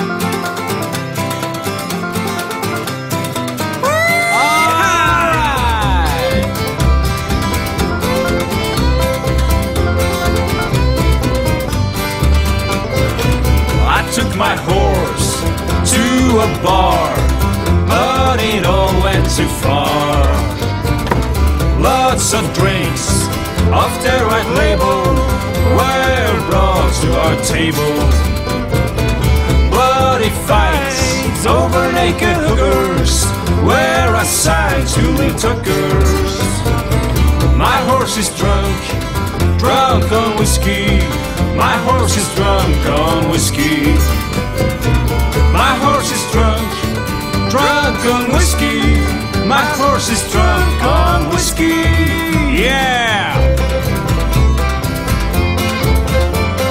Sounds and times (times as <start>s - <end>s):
Music: 0.0s - 56.7s.